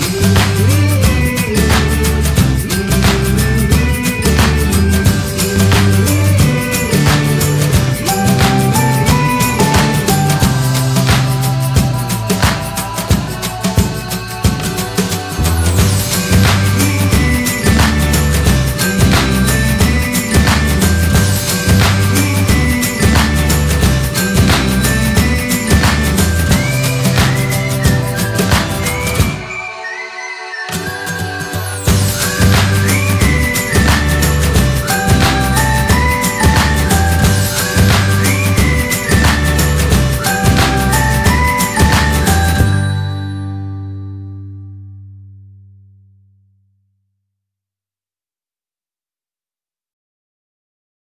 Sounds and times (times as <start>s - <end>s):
Music: 0.0s - 46.9s.